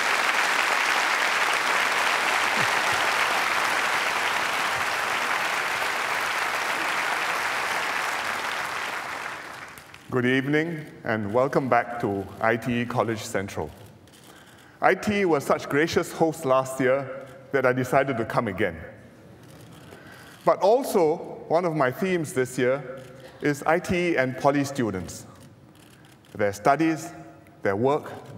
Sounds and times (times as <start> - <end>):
Narration, monologue: 9.8 - 28.3
Male speech, man speaking: 10.1 - 13.8, 14.8 - 18.9, 20.5 - 25.3, 26.4 - 28.3.